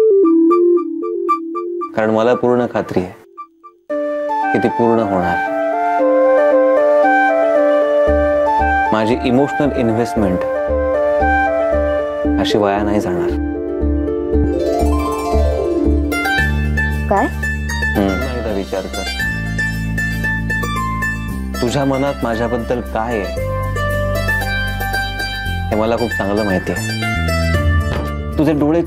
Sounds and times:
Music: 0:00.0 - 0:28.8
Speech: 0:02.0 - 0:03.2, 0:18.0 - 0:19.1, 0:21.6 - 0:23.4, 0:25.7 - 0:26.9, 0:28.4 - 0:28.8.

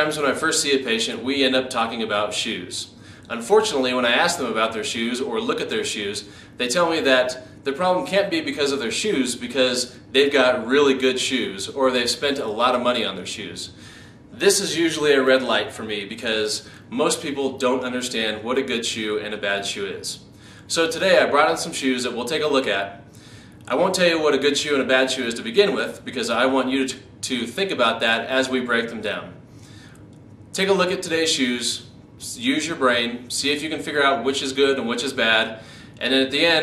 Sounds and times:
Speech: 0:00.0 - 0:13.8, 0:14.4 - 0:23.0, 0:23.7 - 0:29.4, 0:30.6 - 0:36.6
Inside, small room: 0:00.0 - 0:36.6.

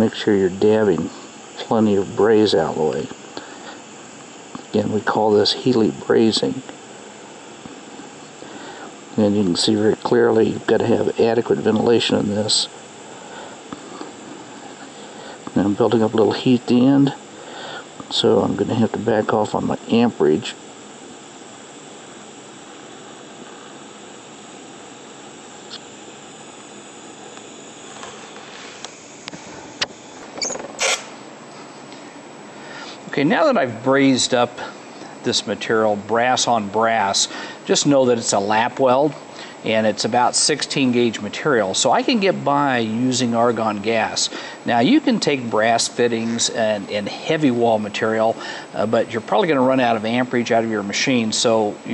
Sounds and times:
Speech: 0:00.0 - 0:03.2, 0:04.7 - 0:06.7, 0:09.2 - 0:12.8, 0:15.5 - 0:17.2, 0:18.1 - 0:20.6, 0:33.1 - 0:51.9.

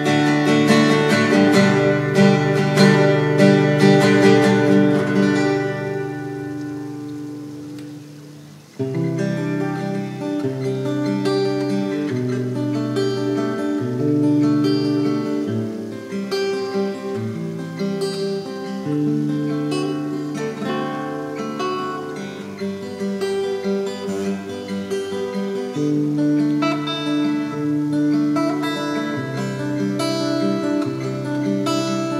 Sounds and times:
Acoustic guitar: 0:00.0 - 0:32.1.

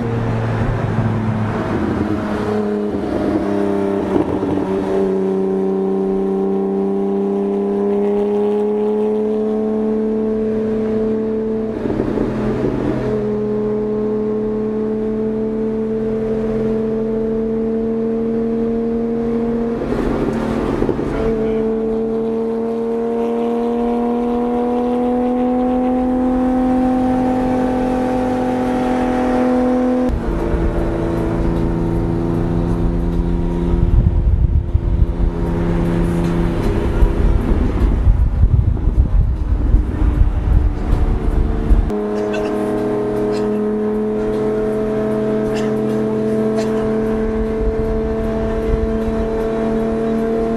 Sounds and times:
Car: 0:00.0 - 0:50.5
Outside, rural or natural: 0:00.0 - 0:50.5.

